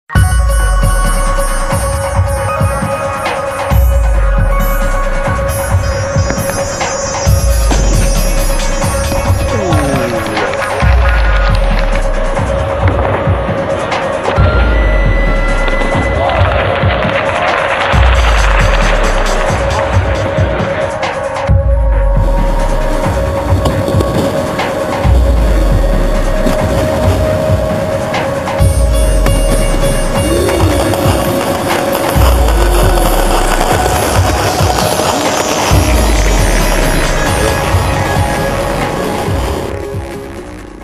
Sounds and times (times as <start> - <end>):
Music: 0.0 - 40.8
Throbbing: 3.7 - 40.8.